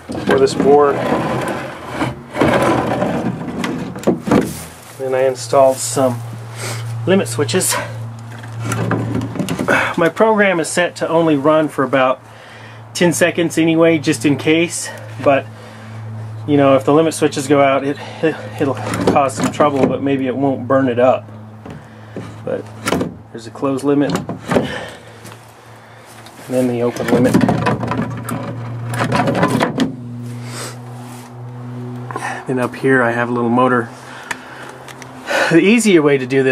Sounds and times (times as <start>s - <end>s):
Speech: 0.2s - 1.1s, 5.0s - 6.2s, 7.0s - 7.9s, 9.9s - 12.2s, 13.0s - 15.5s, 16.5s - 21.2s, 22.4s - 22.7s, 23.3s - 24.2s, 26.5s - 27.6s, 32.2s - 33.9s, 35.5s - 36.5s.